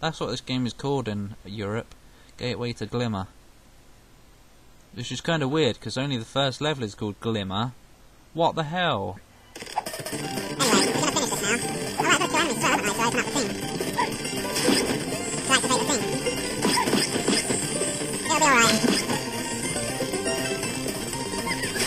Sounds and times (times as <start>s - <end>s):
Speech: 0.0s - 3.3s, 5.0s - 7.8s, 8.4s - 9.2s, 10.6s - 13.5s, 15.5s - 16.0s, 18.3s - 18.8s
Music: 9.9s - 21.8s.